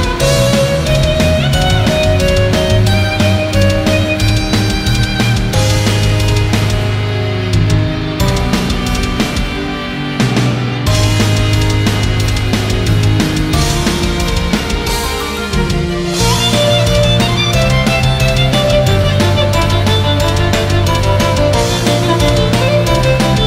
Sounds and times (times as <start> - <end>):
Violin, fiddle: 0.0 - 6.4, 14.1 - 23.4.